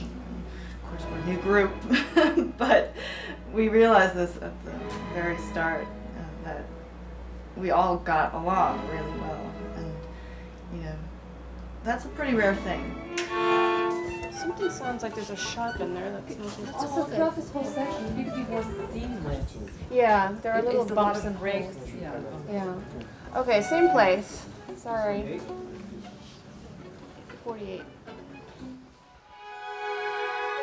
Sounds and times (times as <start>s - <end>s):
Cello: 0.0s - 30.6s
Female speech, woman speaking: 0.8s - 6.7s, 7.6s - 10.1s, 10.7s - 11.1s, 11.8s - 13.0s, 14.3s - 25.5s, 27.4s - 28.0s
Violin, fiddle: 12.3s - 19.1s, 23.4s - 30.6s.